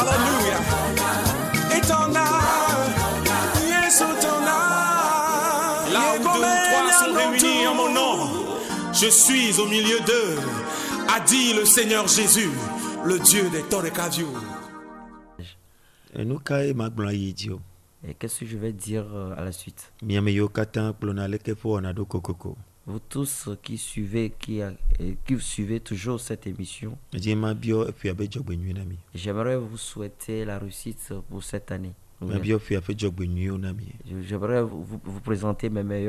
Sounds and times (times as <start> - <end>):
Music: 0.0 - 15.4
Speech: 15.4 - 36.0.